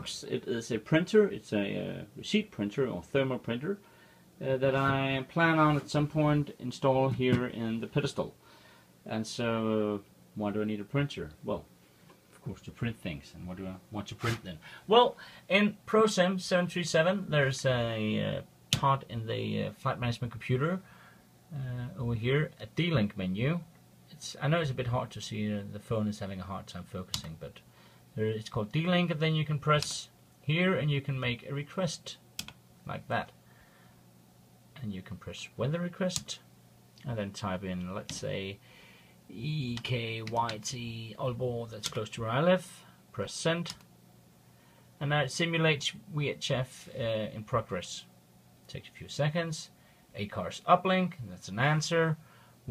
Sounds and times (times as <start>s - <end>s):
Speech: 0.0s - 3.8s, 4.4s - 8.4s, 9.0s - 11.7s, 12.4s - 20.9s, 21.5s - 32.2s, 32.8s - 33.4s, 34.8s - 38.6s, 39.3s - 43.8s, 45.0s - 48.1s, 48.7s - 52.7s.